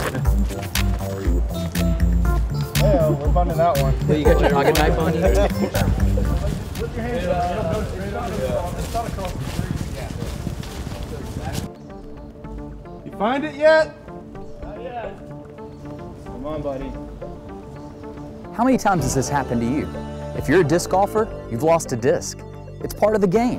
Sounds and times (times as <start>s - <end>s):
Music: 0.0s - 23.5s
Speech: 18.6s - 23.5s.